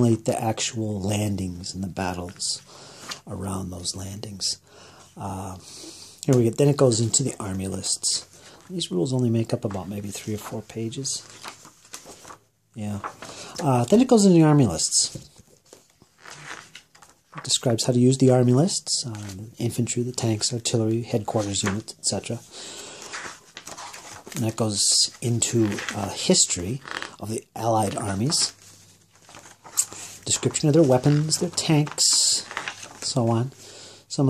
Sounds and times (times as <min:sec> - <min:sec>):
Speech: 0:00.0 - 0:04.6, 0:05.2 - 0:11.4, 0:12.8 - 0:15.3, 0:17.4 - 0:22.5, 0:24.4 - 0:28.6, 0:30.2 - 0:34.2
Inside, small room: 0:00.0 - 0:34.2.